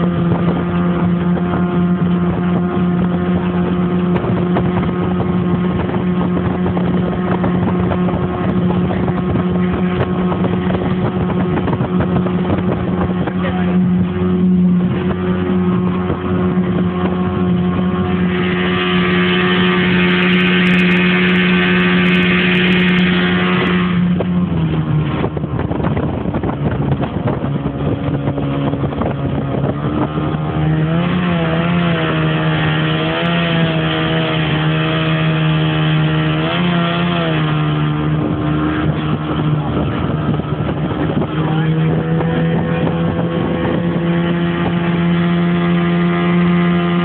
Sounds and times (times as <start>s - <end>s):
Motorboat, speedboat: 0.0s - 47.0s
Ship: 0.0s - 47.0s.